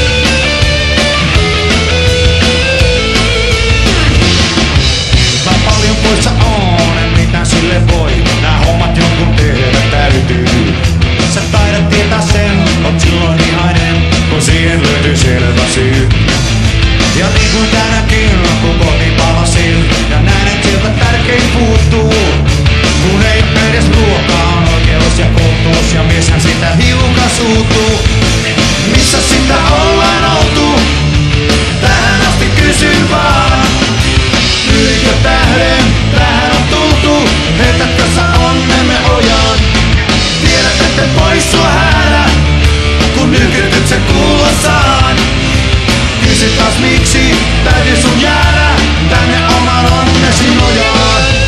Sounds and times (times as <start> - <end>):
Punk rock: 0.0 - 51.4.